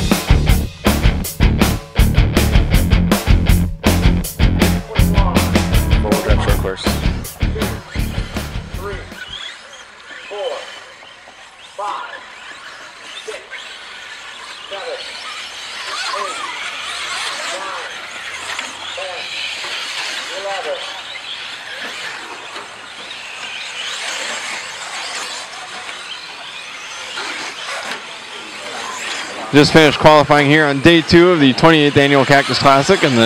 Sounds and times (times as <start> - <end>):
Speech: 4.9 - 7.9, 8.8 - 9.2, 10.3 - 10.8, 11.8 - 12.2, 13.2 - 13.6, 14.7 - 15.2, 16.1 - 16.6, 19.0 - 19.3, 20.3 - 21.0, 29.5 - 33.2.